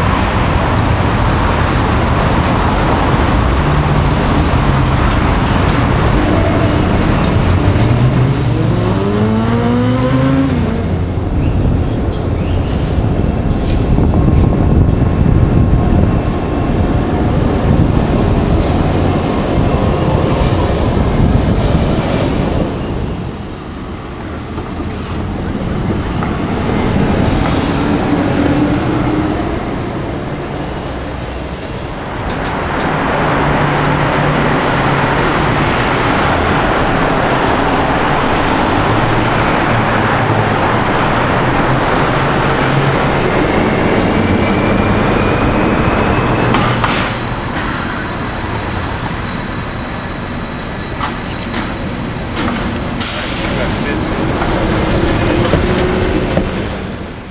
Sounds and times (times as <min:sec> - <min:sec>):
Bus: 0:00.0 - 0:57.3
Traffic noise, roadway noise: 0:00.0 - 0:57.3.